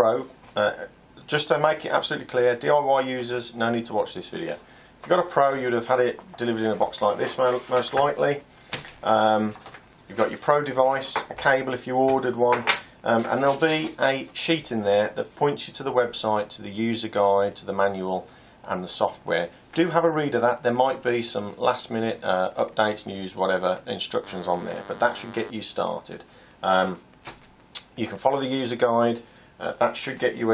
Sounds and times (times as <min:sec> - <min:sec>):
Speech: 0:00.0 - 0:27.0, 0:27.8 - 0:30.5
Inside, small room: 0:00.0 - 0:30.5.